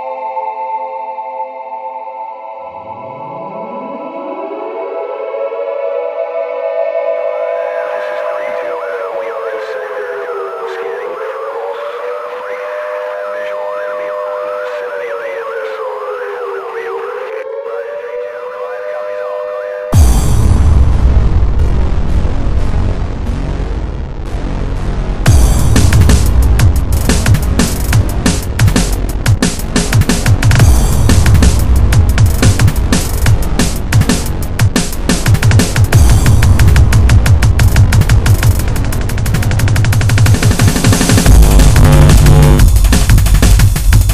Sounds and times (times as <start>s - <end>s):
Drum: 25.3s - 44.1s
Drum kit: 25.3s - 44.1s.